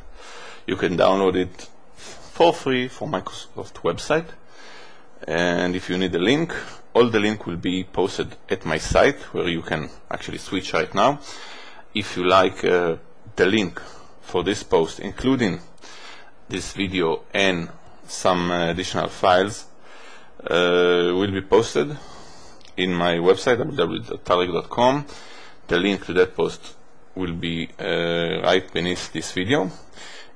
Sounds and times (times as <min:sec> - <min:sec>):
Speech: 0:00.7 - 0:04.4, 0:05.2 - 0:11.3, 0:11.9 - 0:15.7, 0:16.5 - 0:19.7, 0:20.4 - 0:25.1, 0:25.7 - 0:29.9.